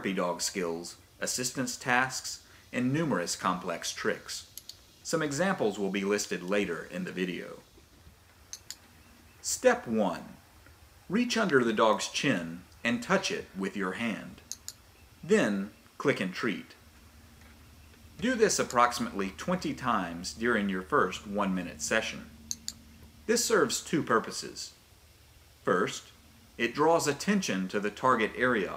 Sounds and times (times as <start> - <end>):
Speech: 0.0 - 4.5, 5.1 - 7.6, 9.4 - 10.4, 11.1 - 14.4, 15.2 - 16.8, 18.2 - 22.3, 23.3 - 24.8, 25.7 - 28.7.